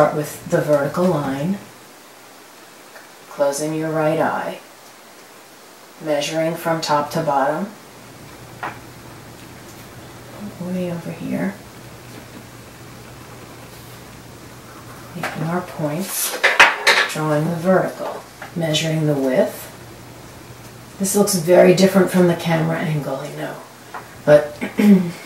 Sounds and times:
Speech: 0.0 - 1.7, 3.3 - 4.7, 6.0 - 7.8, 10.3 - 11.6, 15.2 - 16.4, 17.1 - 19.8, 21.0 - 23.7, 24.3 - 25.2
Pink noise: 0.0 - 25.2
White noise: 0.0 - 25.2.

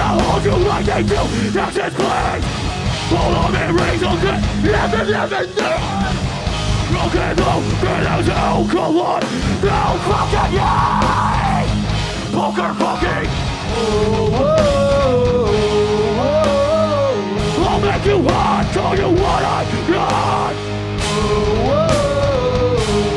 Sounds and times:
Music: 0.0 - 23.1.

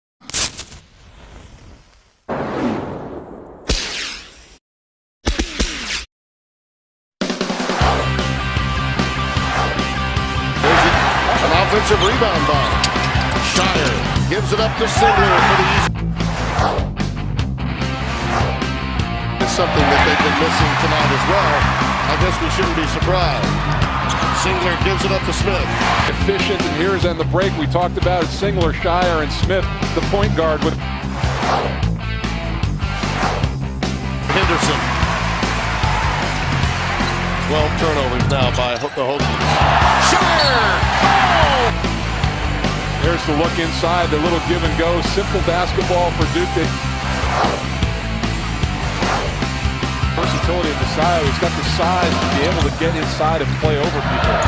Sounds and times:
Music: 7.2 - 54.4.

